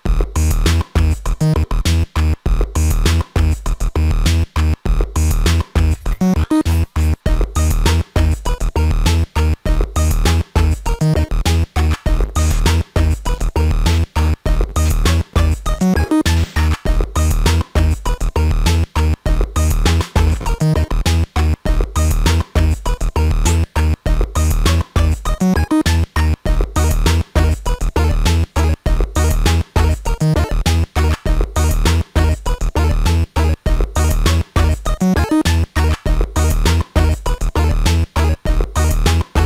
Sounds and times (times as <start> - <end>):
Drum machine: 0.0 - 39.4.